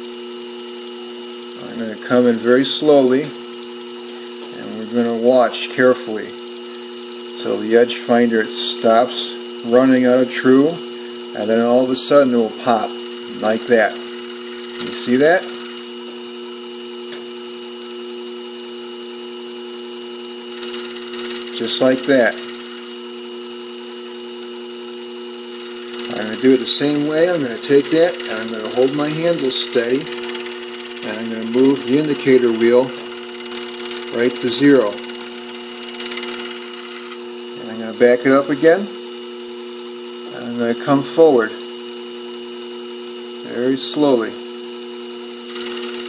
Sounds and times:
Speech: 1.6 - 3.4, 4.5 - 6.4, 7.4 - 14.0, 14.8 - 15.5, 21.6 - 22.4, 26.1 - 30.1, 31.0 - 33.0, 34.1 - 35.0, 37.6 - 39.0, 40.3 - 41.6, 43.4 - 44.4.

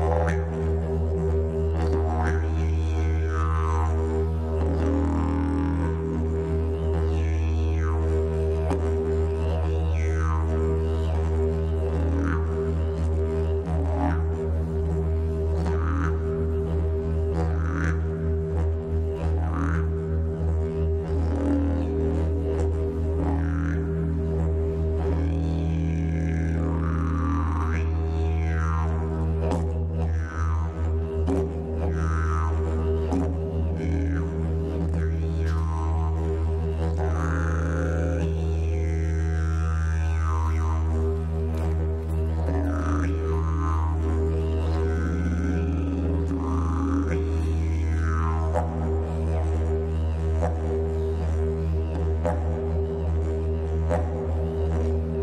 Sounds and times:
Didgeridoo: 0.0 - 55.2.

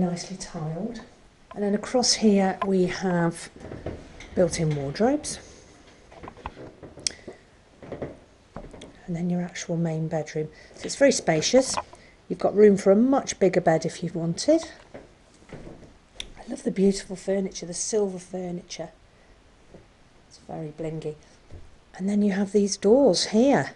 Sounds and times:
Speech: 0.0 - 3.6, 4.4 - 5.4, 9.0 - 14.8, 16.3 - 19.0, 20.3 - 21.3, 22.0 - 23.7.

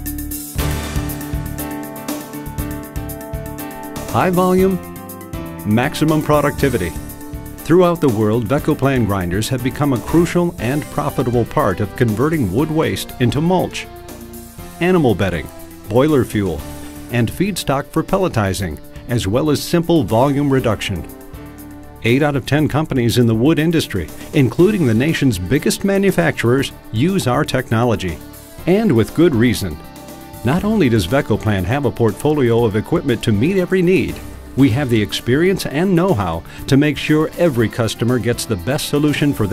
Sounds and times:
Music: 0.0 - 39.5
Speech: 4.1 - 4.8, 5.7 - 7.0, 7.7 - 13.9, 14.8 - 21.1, 22.0 - 29.8, 30.4 - 39.5.

